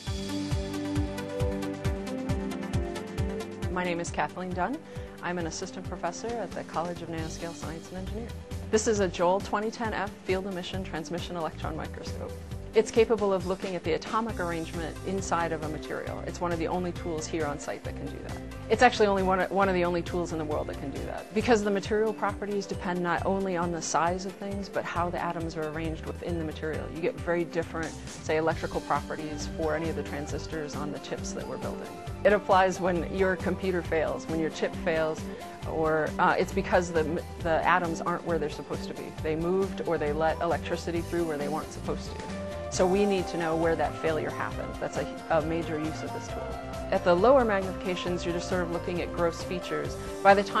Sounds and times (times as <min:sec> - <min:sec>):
Music: 0:00.0 - 0:50.6
Speech: 0:03.7 - 0:50.6.